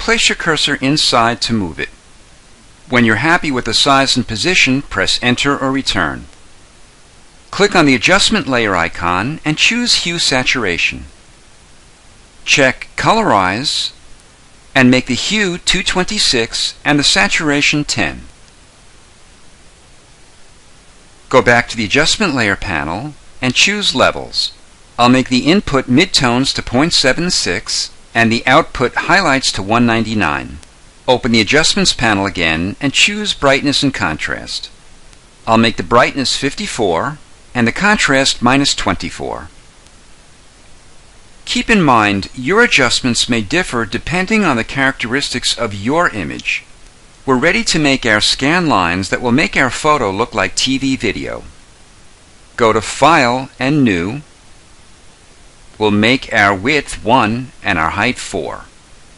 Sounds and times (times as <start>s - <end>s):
Speech: 0.0s - 2.0s, 2.9s - 6.4s, 7.5s - 11.2s, 12.5s - 14.0s, 14.8s - 18.4s, 21.3s - 34.8s, 35.5s - 39.6s, 41.5s - 46.7s, 47.3s - 51.6s, 52.6s - 54.3s, 55.8s - 58.8s.